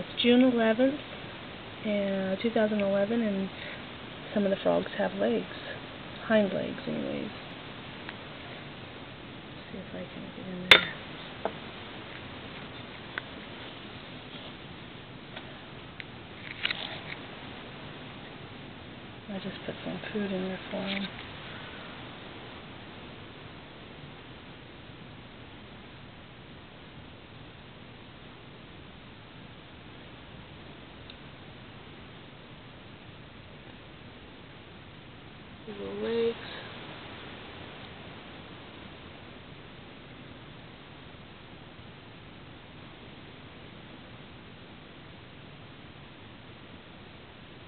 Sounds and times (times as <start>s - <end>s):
Speech: 0.0s - 1.0s, 1.8s - 3.6s, 4.3s - 7.4s, 9.6s - 11.0s, 19.3s - 21.1s, 35.7s - 36.7s.